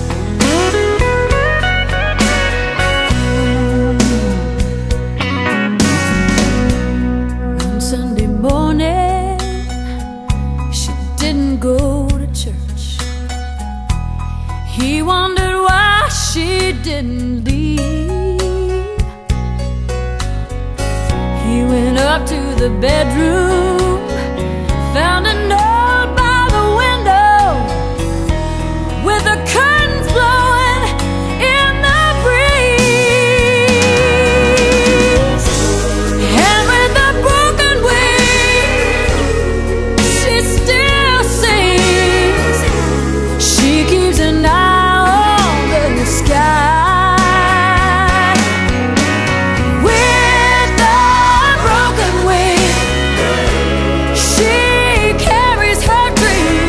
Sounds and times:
Music: 0:00.0 - 0:56.6.

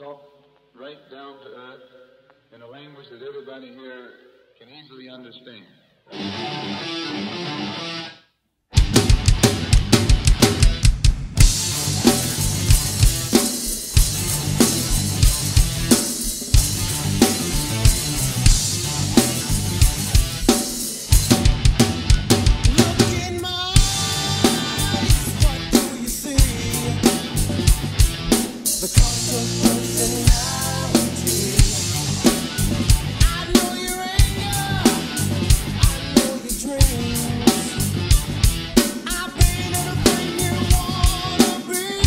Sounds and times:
Drum kit: 0:08.7 - 0:42.0
Bass drum: 0:08.8 - 0:25.8, 0:26.4 - 0:28.4, 0:29.0 - 0:33.6, 0:34.2 - 0:36.2, 0:36.8 - 0:38.8, 0:39.4 - 0:41.4.

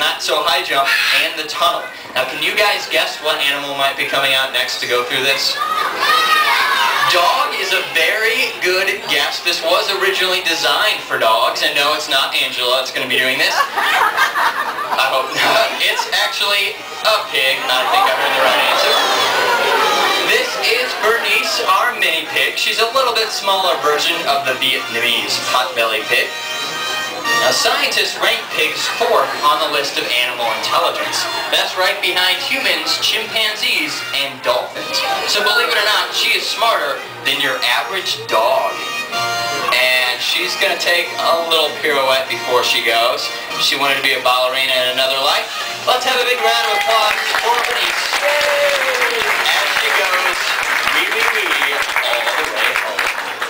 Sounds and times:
Speech: 0:00.0 - 0:05.7, 0:07.0 - 0:13.7, 0:15.0 - 0:19.2, 0:20.3 - 0:26.3, 0:27.3 - 0:38.8, 0:39.7 - 0:48.4, 0:49.2 - 0:53.1
Music: 0:00.0 - 0:53.5.

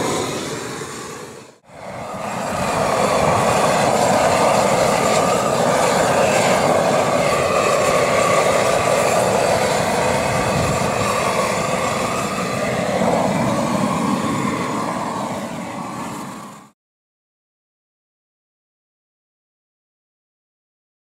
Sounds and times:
Outside, rural or natural: 0:00.0 - 0:16.8.

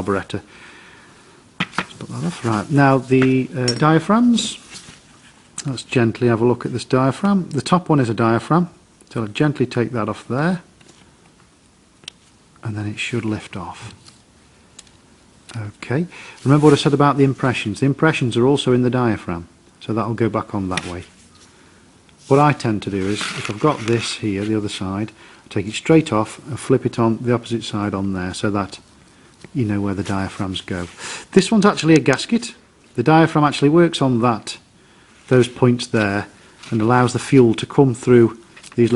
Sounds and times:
Speech: 0:00.0 - 0:00.5, 0:02.0 - 0:04.6, 0:05.6 - 0:10.7, 0:12.6 - 0:14.0, 0:15.5 - 0:21.2, 0:22.3 - 0:28.8, 0:29.5 - 0:34.7, 0:35.3 - 0:38.9.

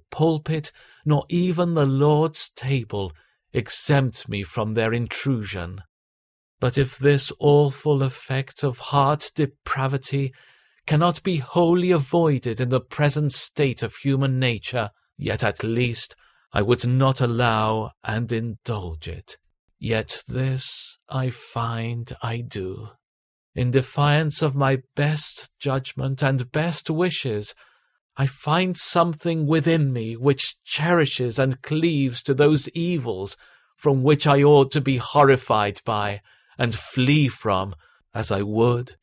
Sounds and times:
Narration, monologue: 0:00.0 - 0:05.9, 0:06.6 - 0:39.0.

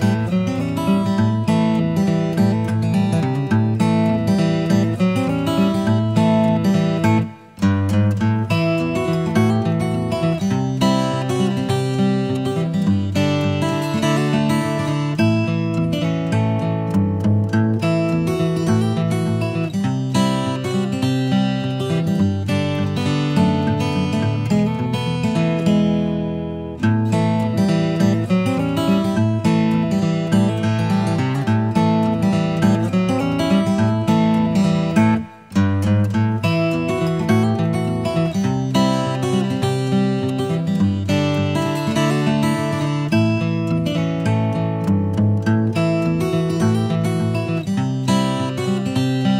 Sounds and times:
Music: 0:00.0 - 0:49.3.

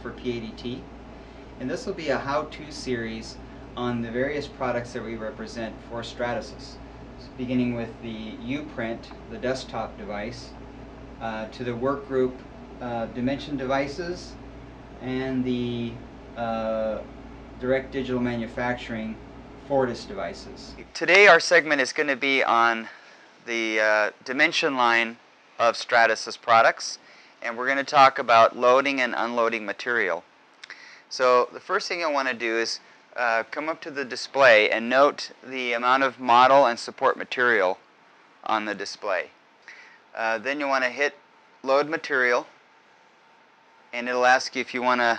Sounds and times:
Speech: 0:00.0 - 0:00.9, 0:01.6 - 0:10.6, 0:11.2 - 0:14.4, 0:15.0 - 0:30.2, 0:31.1 - 0:37.8, 0:38.4 - 0:39.3, 0:40.2 - 0:42.5, 0:44.0 - 0:45.1.

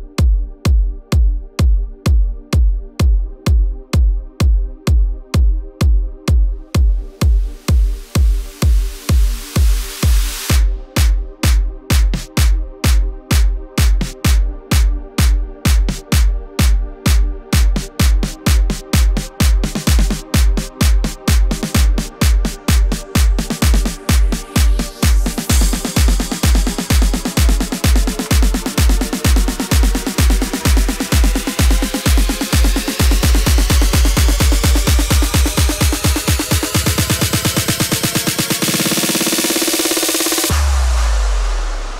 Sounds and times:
Music: 0:00.0 - 0:41.9.

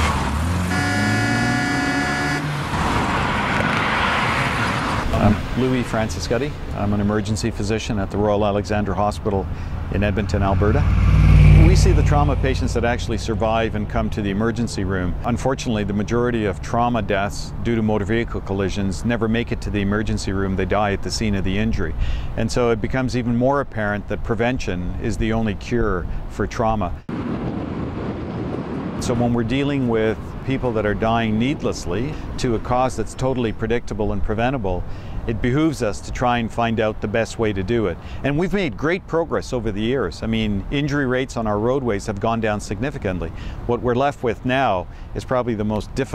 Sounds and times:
Car: 0:00.0 - 0:46.1
Traffic noise, roadway noise: 0:00.0 - 0:46.1
Speech: 0:05.1 - 0:10.8, 0:11.6 - 0:27.0, 0:29.0 - 0:46.1.

